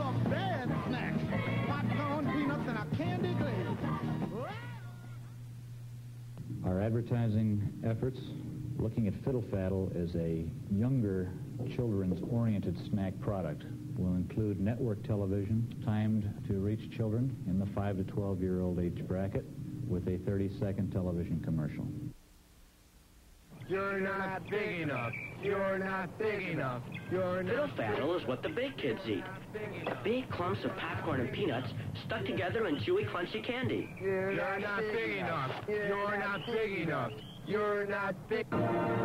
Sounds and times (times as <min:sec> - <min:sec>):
Music: 0:00.0 - 0:05.6, 0:37.5 - 0:39.0
Speech: 0:06.5 - 0:22.0, 0:23.7 - 0:38.5.